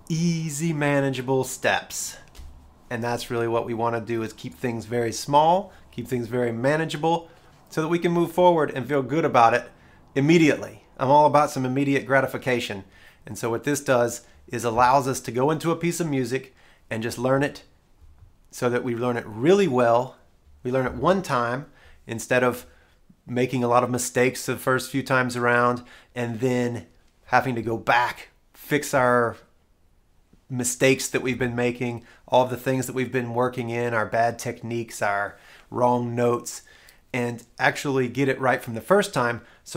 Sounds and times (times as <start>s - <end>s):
Speech: 0.1s - 2.3s, 2.9s - 17.7s, 18.5s - 22.7s, 23.3s - 29.6s, 30.5s - 39.7s.